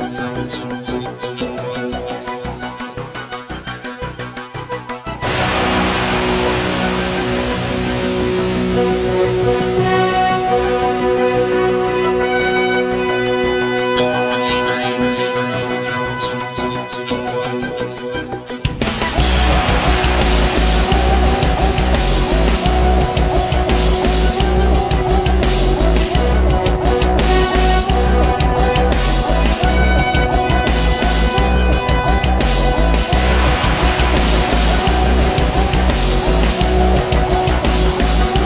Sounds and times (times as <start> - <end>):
Music: 0.0 - 38.4.